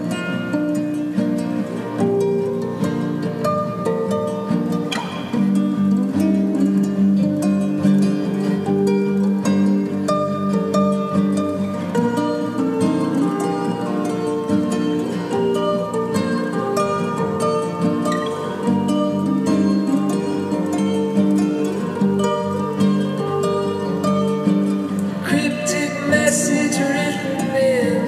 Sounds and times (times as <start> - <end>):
Music: 0.0 - 28.0.